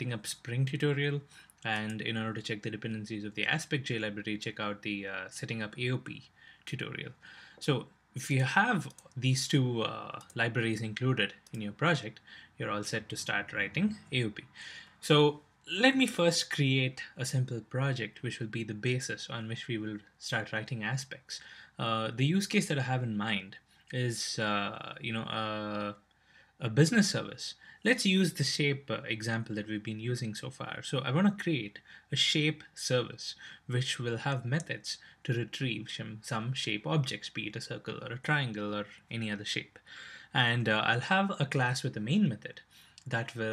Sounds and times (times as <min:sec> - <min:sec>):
Speech: 0:00.0 - 0:26.0, 0:26.6 - 0:43.5.